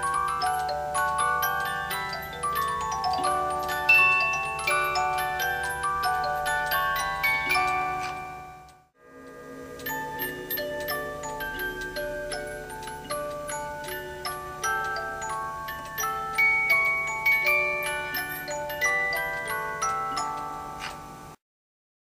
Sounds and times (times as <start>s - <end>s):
Clock: 0.0s - 21.4s
Music: 0.0s - 21.4s.